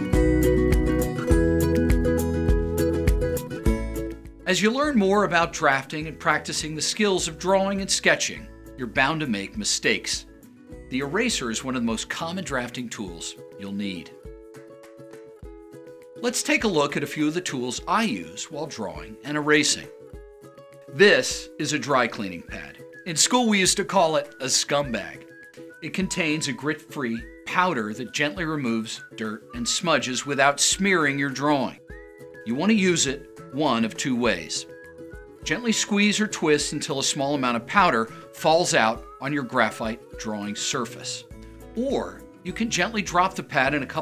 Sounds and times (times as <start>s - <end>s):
Music: 0.0s - 44.0s
Speech: 4.5s - 10.3s, 10.9s - 14.2s, 16.2s - 19.9s, 21.0s - 25.2s, 25.8s - 31.8s, 32.5s - 34.7s, 35.4s - 44.0s.